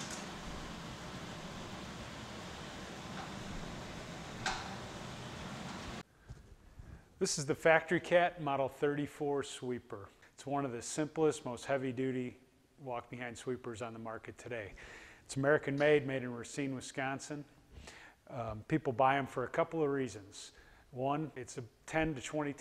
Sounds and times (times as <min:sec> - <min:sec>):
Speech: 0:07.2 - 0:17.5, 0:18.3 - 0:22.6.